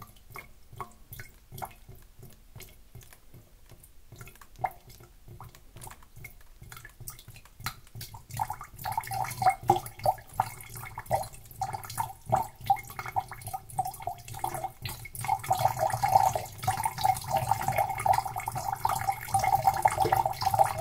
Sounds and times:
Drip: 0:00.0 - 0:20.8.

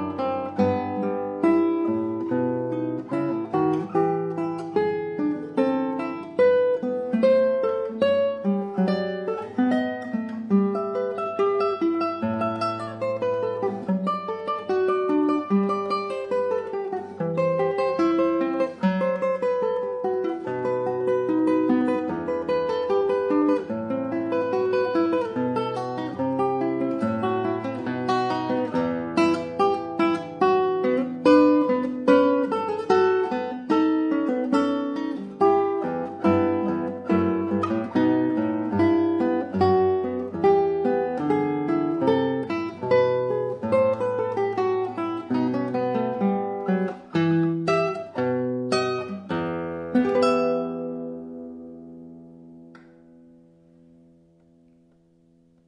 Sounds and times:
Guitar: 0:00.0 - 0:55.6.

